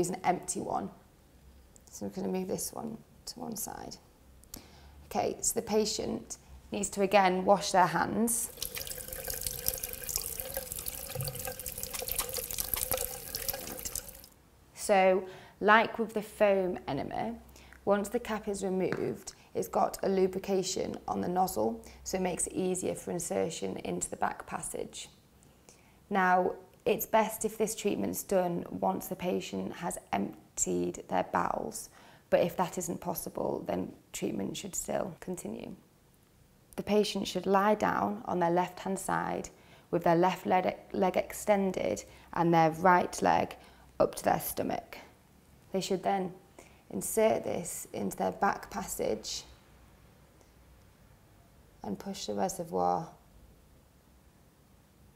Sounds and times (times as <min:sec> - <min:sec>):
Sink (filling or washing): 0:08.4 - 0:14.4
Water: 0:08.4 - 0:14.4
Water tap, faucet: 0:08.4 - 0:14.4.